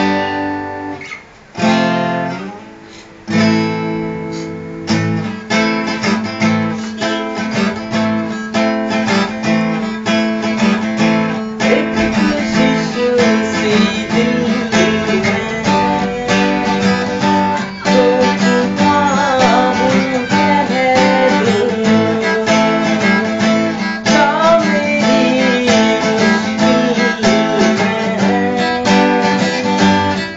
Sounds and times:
Acoustic guitar: 0.0s - 30.3s
Strum: 0.0s - 30.3s.

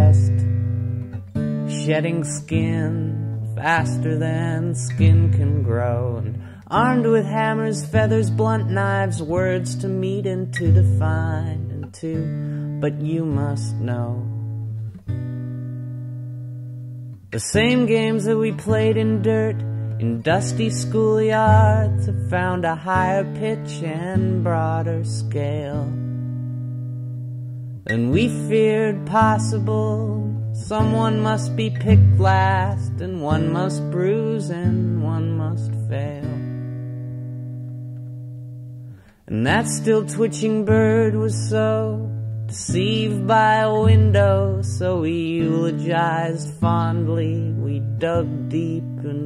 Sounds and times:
Music: 0.0s - 49.2s.

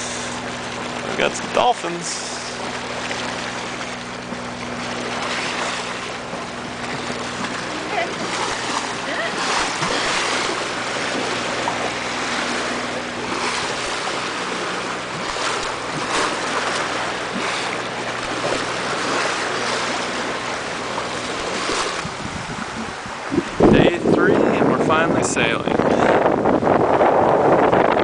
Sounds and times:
Boat, Water vehicle: 0.0s - 28.0s
Ocean: 0.0s - 28.0s
Speech: 1.1s - 2.4s, 23.7s - 25.8s.

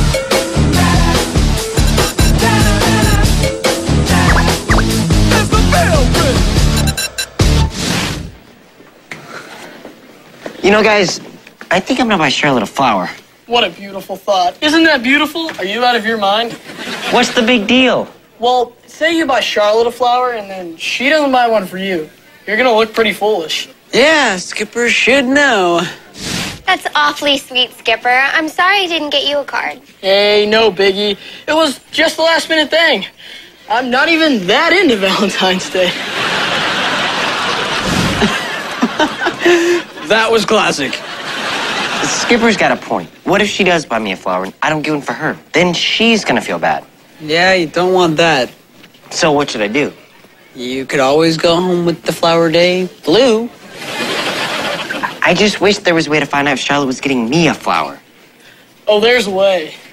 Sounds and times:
Music: 0.0s - 7.8s.

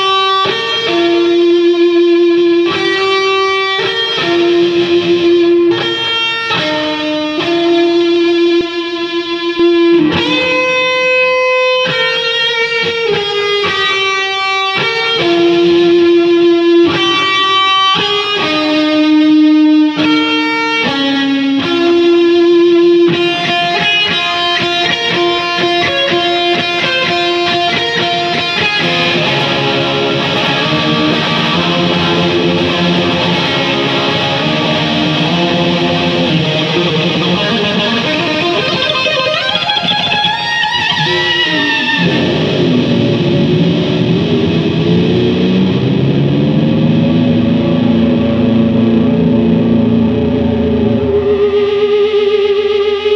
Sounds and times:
Electric guitar: 0.0s - 53.1s
Strum: 23.2s - 52.2s.

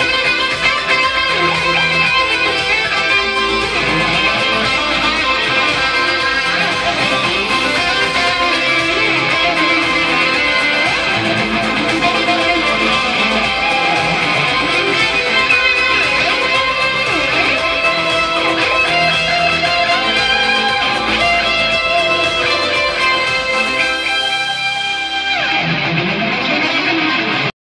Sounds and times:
Electric guitar: 0.0s - 27.6s.

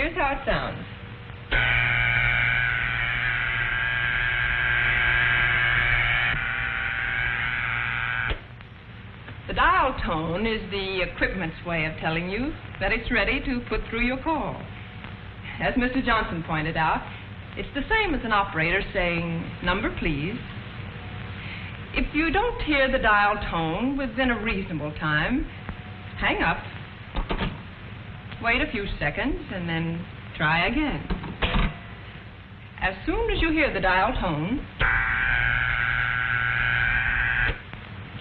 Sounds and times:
Speech: 0.0s - 0.9s, 9.5s - 14.7s, 15.5s - 20.5s, 21.9s - 25.5s, 26.2s - 26.7s, 28.4s - 31.1s, 32.8s - 34.7s.

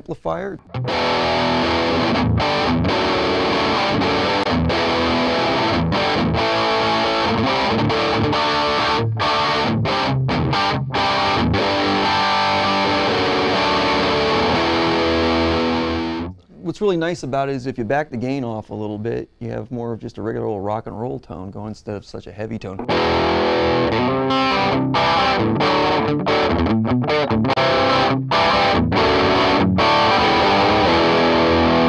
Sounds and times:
Speech: 0.0s - 0.6s, 16.5s - 22.9s
Electric guitar: 0.6s - 16.5s, 22.8s - 31.8s.

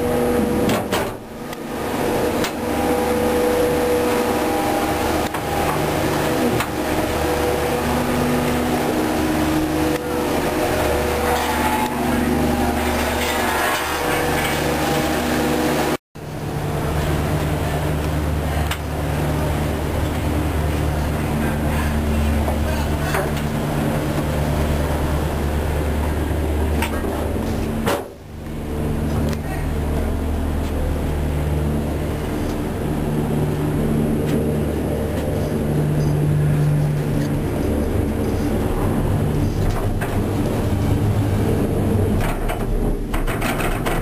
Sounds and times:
Vehicle: 0.0s - 44.0s.

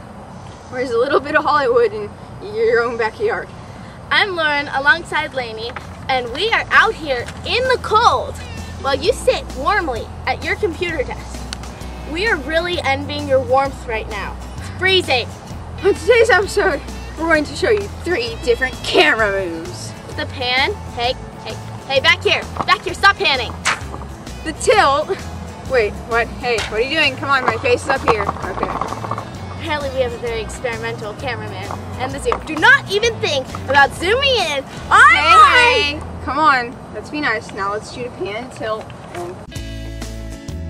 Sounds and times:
Music: 6.1s - 36.4s, 37.4s - 40.6s.

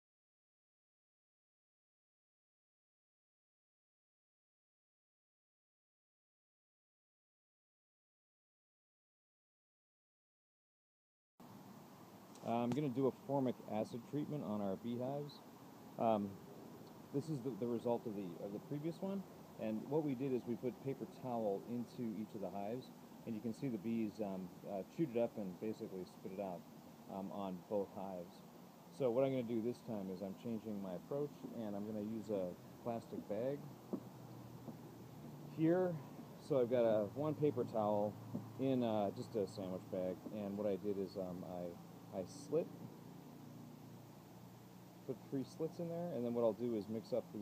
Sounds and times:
Speech: 12.4s - 15.4s, 16.0s - 16.4s, 17.1s - 33.7s, 35.5s - 42.7s, 45.1s - 47.4s.

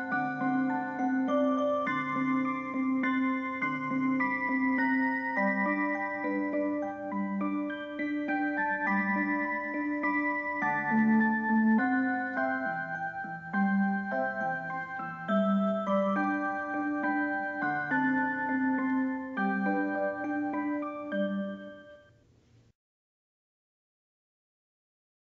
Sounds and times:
Music: 0.0s - 22.2s.

